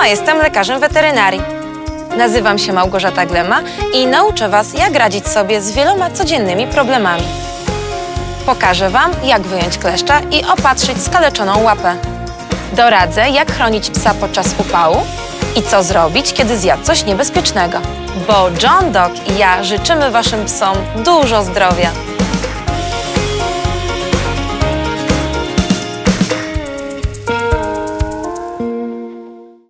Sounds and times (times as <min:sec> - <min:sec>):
Music: 0:00.0 - 0:29.7
Speech: 0:02.2 - 0:07.3, 0:08.5 - 0:12.0, 0:12.8 - 0:22.0.